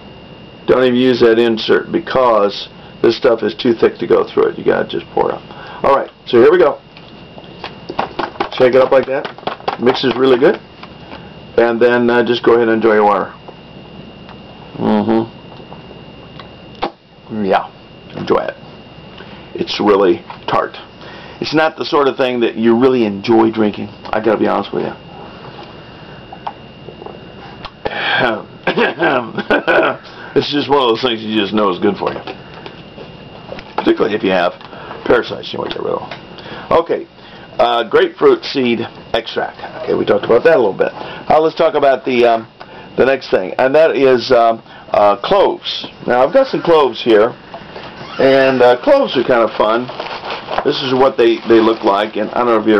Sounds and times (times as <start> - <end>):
Inside, small room: 0.0 - 52.7
Speech: 0.7 - 6.8, 8.5 - 10.6, 11.6 - 13.4, 17.3 - 18.6, 19.6 - 25.0, 28.2 - 28.5, 30.4 - 32.2, 33.8 - 36.1, 36.7 - 47.4, 48.2 - 50.0, 50.6 - 52.7.